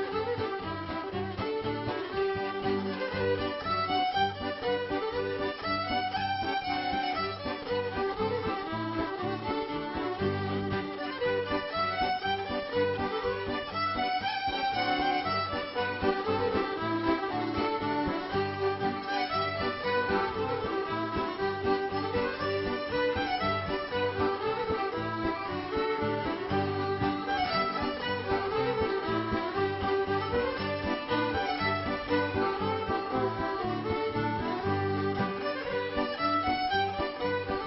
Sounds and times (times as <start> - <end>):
Orchestra: 0.0 - 37.6.